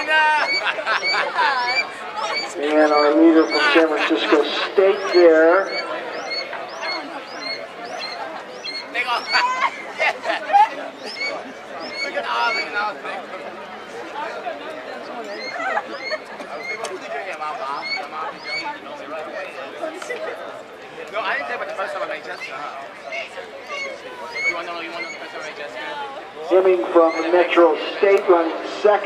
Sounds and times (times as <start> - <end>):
Chatter: 0.0 - 29.0
Speech: 1.6 - 6.3, 16.4 - 29.0.